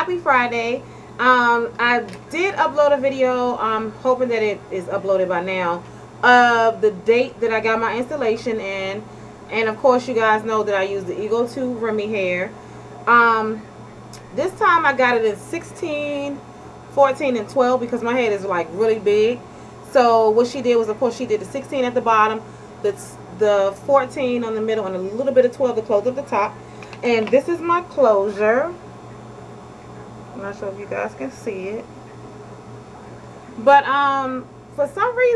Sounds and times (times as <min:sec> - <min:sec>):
Speech: 0:00.0 - 0:13.6, 0:14.2 - 0:16.4, 0:17.0 - 0:28.8, 0:30.4 - 0:31.9, 0:33.6 - 0:35.3.